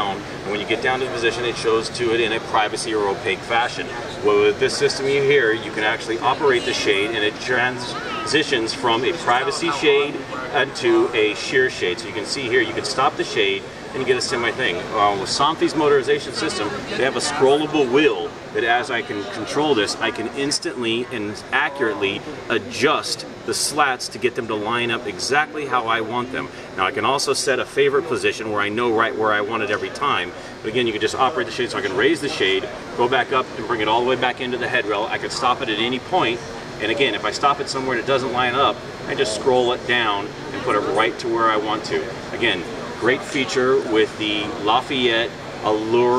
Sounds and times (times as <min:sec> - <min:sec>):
Speech: 0:00.0 - 0:46.1.